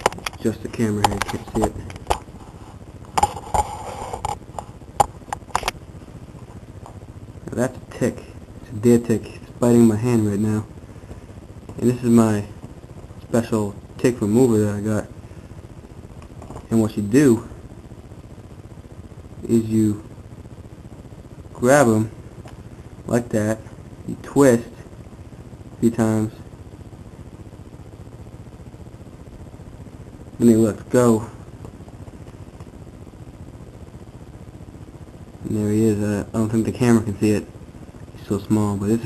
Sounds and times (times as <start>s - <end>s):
Speech: 0.4s - 1.8s, 7.4s - 10.7s, 11.8s - 12.6s, 13.3s - 15.1s, 16.6s - 17.5s, 19.4s - 20.1s, 21.6s - 22.1s, 23.1s - 24.8s, 25.8s - 26.4s, 30.4s - 31.4s, 35.4s - 37.5s, 38.2s - 39.0s.